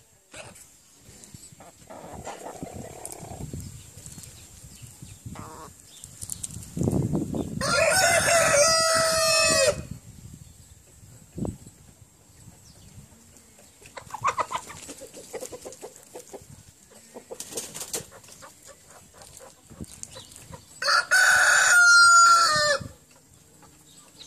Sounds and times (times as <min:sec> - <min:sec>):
Chicken, rooster: 0:01.6 - 0:03.5, 0:12.4 - 0:24.2.